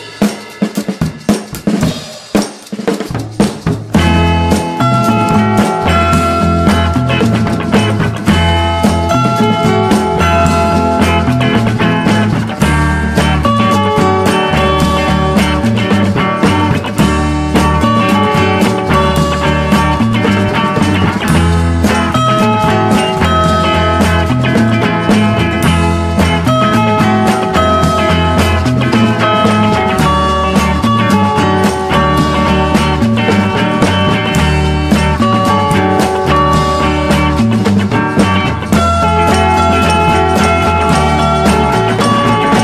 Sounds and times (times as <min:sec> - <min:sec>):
Music: 0:00.0 - 0:42.6.